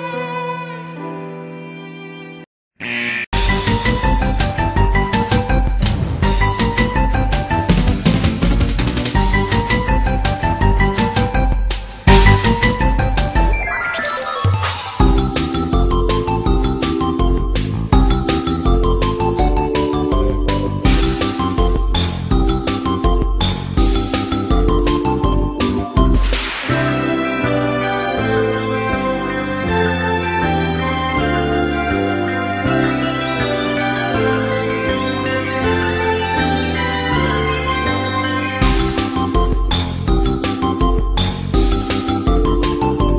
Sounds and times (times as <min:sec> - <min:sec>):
Soundtrack music: 0:02.8 - 0:43.1.